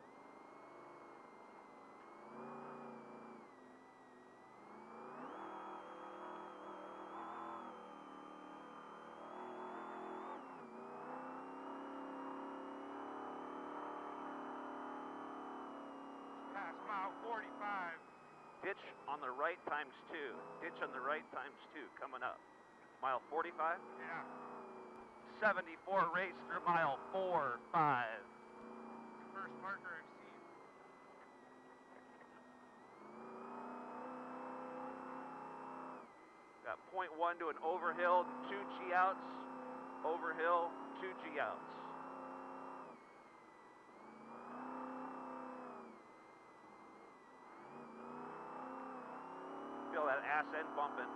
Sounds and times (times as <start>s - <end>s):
Car: 0.0s - 51.1s
Speech: 16.6s - 18.0s, 18.6s - 22.4s, 23.0s - 24.2s, 25.3s - 28.2s, 29.4s - 30.1s, 36.7s - 39.4s, 40.1s - 41.8s, 49.9s - 51.1s.